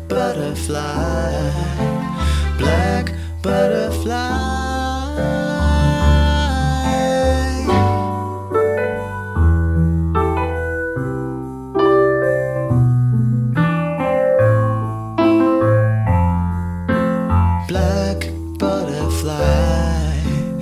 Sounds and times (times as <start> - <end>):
Electric piano: 0.0 - 20.6.